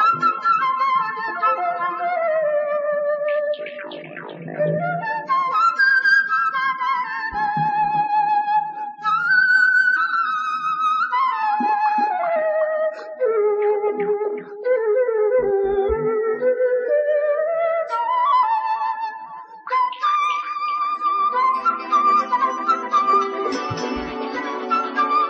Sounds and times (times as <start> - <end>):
Music: 0.0 - 25.2.